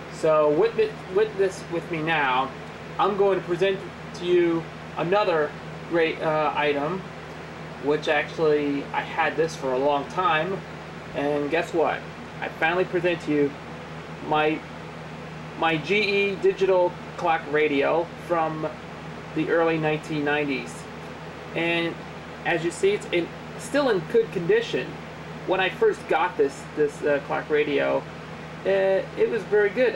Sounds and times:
Speech: 0.1s - 7.1s, 7.8s - 13.6s, 14.2s - 14.7s, 15.6s - 18.8s, 19.4s - 20.9s, 21.6s - 28.0s, 28.6s - 29.9s.

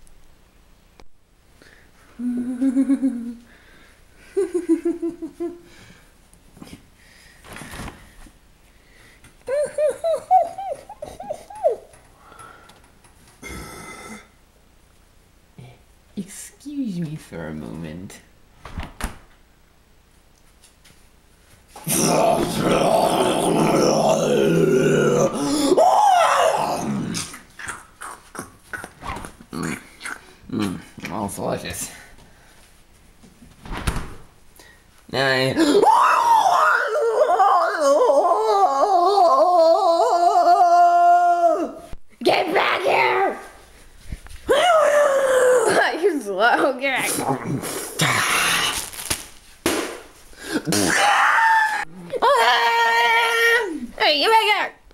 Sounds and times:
Growling: 21.9s - 25.8s, 26.4s - 27.8s.

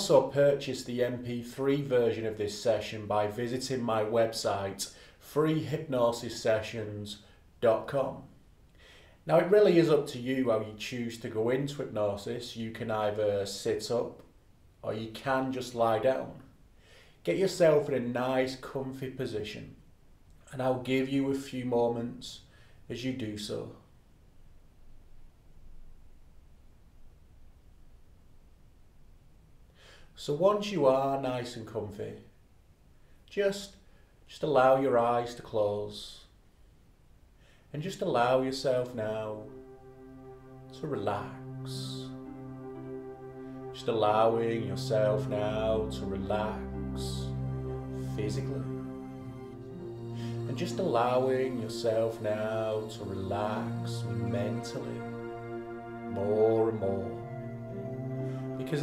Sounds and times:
Speech: 0.0s - 8.3s, 9.3s - 16.5s, 17.2s - 19.8s, 20.4s - 23.9s, 30.2s - 32.4s, 33.3s - 36.4s, 37.7s - 39.5s, 40.8s - 42.2s, 43.8s - 47.3s, 48.0s - 48.7s, 50.5s - 55.1s, 56.1s - 57.2s, 58.6s - 58.8s.

